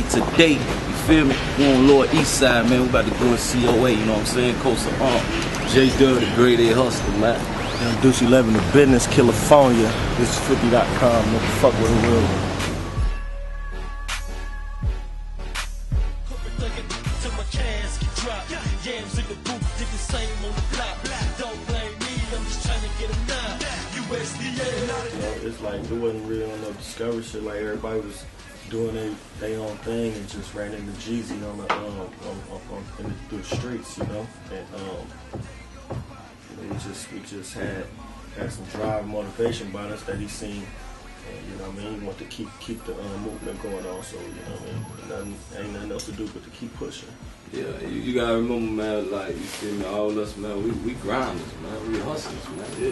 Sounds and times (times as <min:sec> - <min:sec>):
Speech: 0:00.0 - 0:12.4, 0:25.0 - 0:35.1, 0:36.5 - 0:52.9
Music: 0:00.0 - 0:52.9.